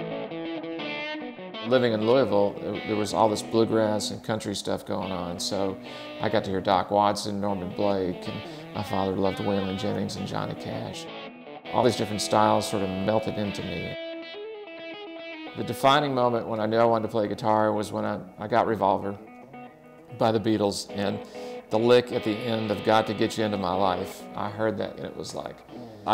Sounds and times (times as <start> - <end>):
Speech: 1.7 - 11.1, 11.7 - 14.0, 15.6 - 19.2, 20.1 - 26.1.